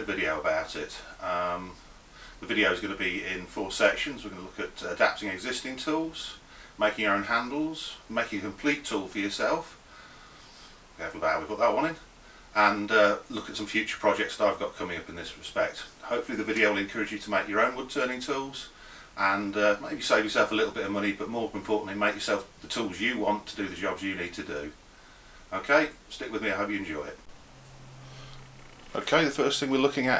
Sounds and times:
Speech: 0.0 - 1.8, 2.4 - 9.8, 11.0 - 24.8, 25.5 - 27.3, 29.0 - 30.2.

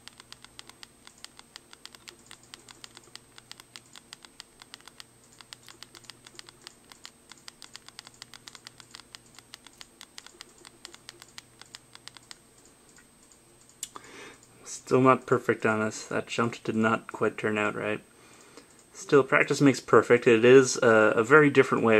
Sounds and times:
Typing: 0.0 - 12.7.

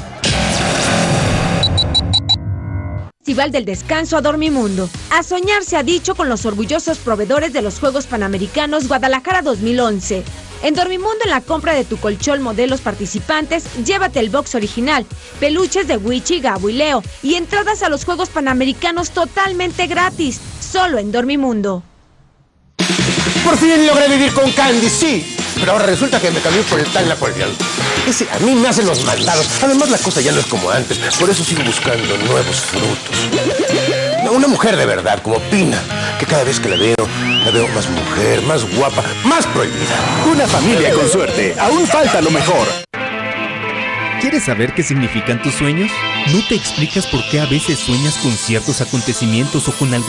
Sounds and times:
Music: 0.0 - 1.8, 3.3 - 20.4, 22.8 - 50.0
Speech: 3.3 - 21.8, 23.4 - 33.0, 34.2 - 42.8, 44.2 - 50.0.

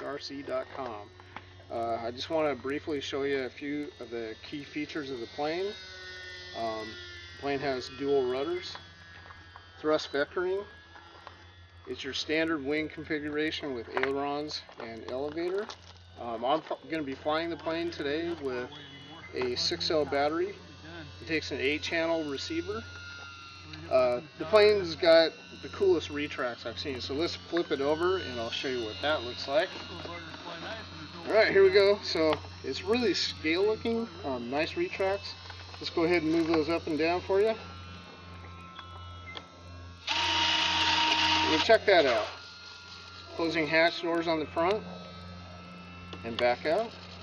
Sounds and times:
Speech: 0.0 - 1.1, 1.7 - 5.8, 6.6 - 8.8, 11.9 - 22.8, 23.7 - 37.6, 41.4 - 42.4, 43.3 - 44.8, 46.2 - 46.9.

